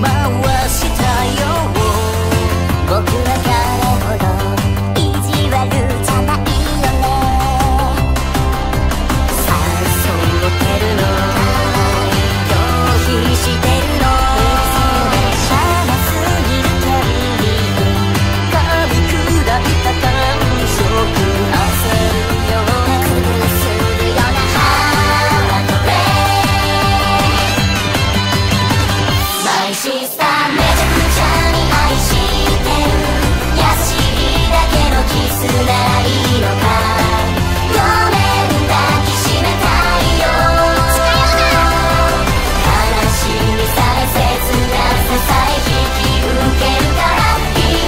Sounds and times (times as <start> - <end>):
Soundtrack music: 0.0 - 47.8.